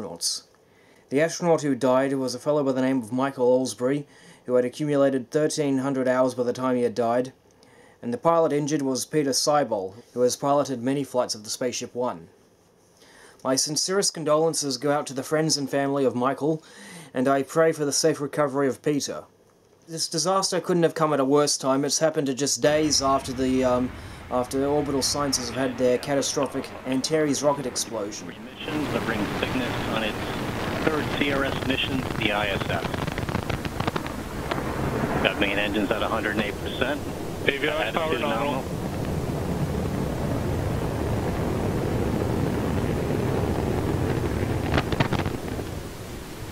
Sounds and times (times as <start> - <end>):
Speech: 0.0 - 0.5, 1.1 - 7.4, 8.0 - 12.3, 13.4 - 19.3, 19.9 - 33.0, 35.2 - 38.6
Explosion: 22.7 - 46.5.